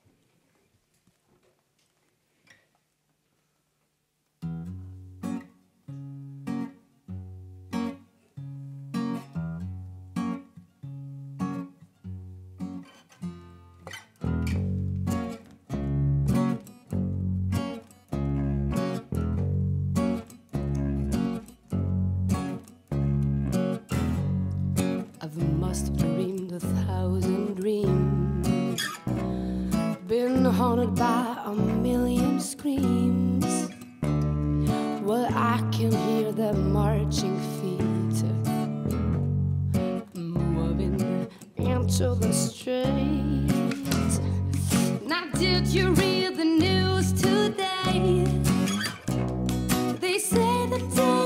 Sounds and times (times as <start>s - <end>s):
Music: 4.4s - 51.2s.